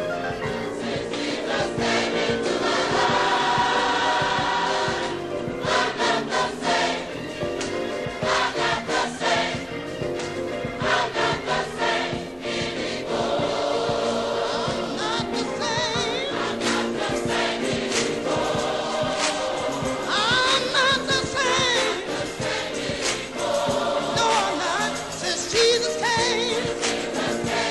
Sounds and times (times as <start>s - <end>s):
Gospel music: 0.0s - 27.7s.